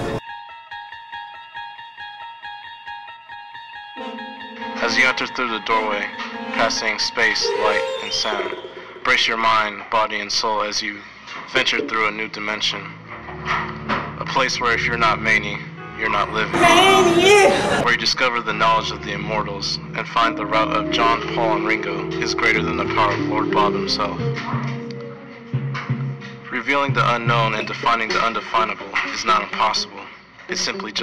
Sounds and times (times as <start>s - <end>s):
Music: 0.0s - 31.0s
Speech: 4.8s - 13.0s, 14.2s - 24.3s, 26.5s - 31.0s.